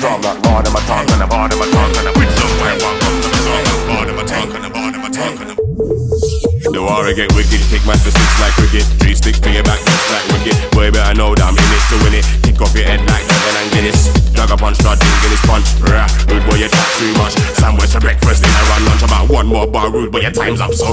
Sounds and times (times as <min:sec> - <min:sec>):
Dubstep: 0:00.0 - 0:20.9.